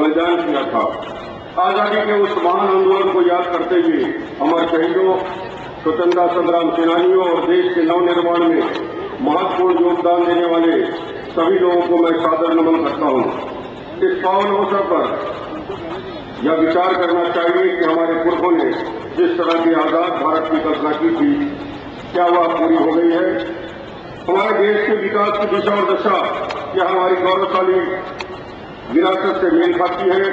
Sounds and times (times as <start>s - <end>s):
Male speech, man speaking: 0.0s - 1.0s, 1.6s - 15.4s, 16.4s - 21.6s, 22.2s - 23.6s, 24.3s - 28.1s, 28.9s - 30.3s
Narration, monologue: 0.0s - 30.3s.